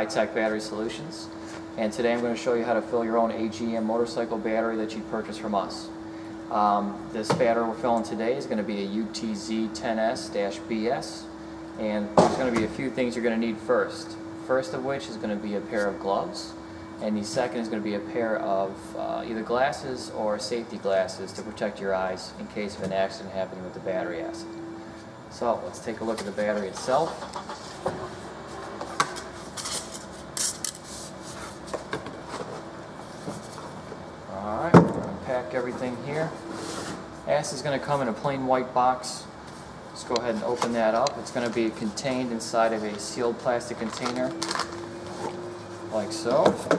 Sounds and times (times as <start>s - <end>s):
Speech: 0.0s - 24.5s, 25.3s - 27.2s, 34.3s - 36.4s, 37.3s - 39.3s, 40.0s - 44.4s, 45.9s - 46.6s.